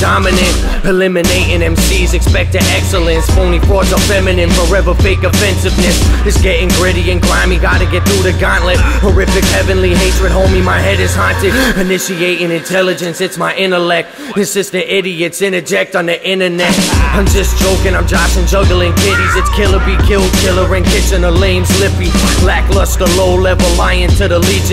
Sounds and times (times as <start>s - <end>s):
Rhythm and blues: 0.0s - 24.7s.